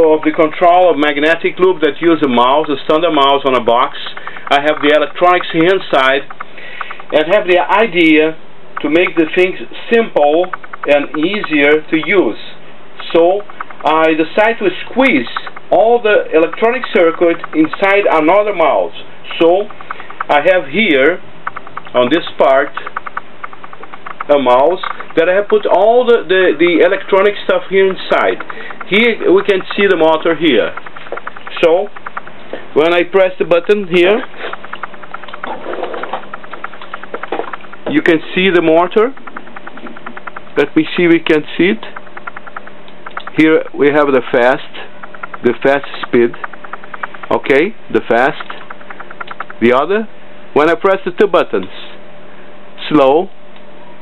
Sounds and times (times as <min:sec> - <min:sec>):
Speech: 0:00.0 - 0:06.3, 0:07.1 - 0:19.7, 0:20.3 - 0:21.2, 0:21.9 - 0:22.9, 0:24.3 - 0:30.8, 0:31.5 - 0:31.9, 0:32.8 - 0:34.4, 0:37.9 - 0:39.2, 0:40.6 - 0:42.0, 0:43.3 - 0:46.5, 0:47.3 - 0:48.6, 0:49.6 - 0:52.0, 0:52.8 - 0:53.3.